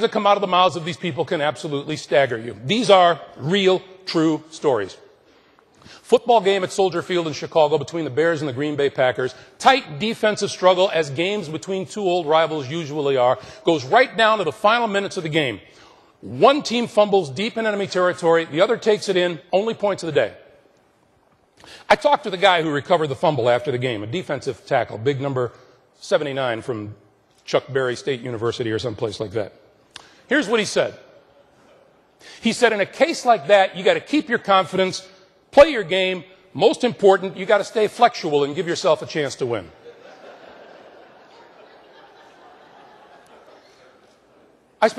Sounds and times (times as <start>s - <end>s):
Male speech, man speaking: 0.0s - 5.0s, 6.1s - 15.6s, 16.2s - 20.4s, 21.9s - 29.6s, 30.3s - 31.0s, 32.4s - 39.8s
Narration, monologue: 0.0s - 44.9s.